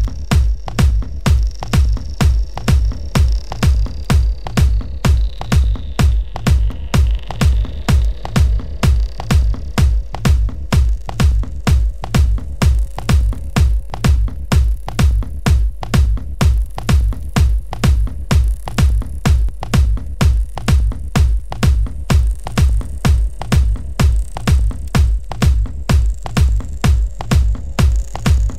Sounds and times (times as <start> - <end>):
Techno: 0.0 - 28.5.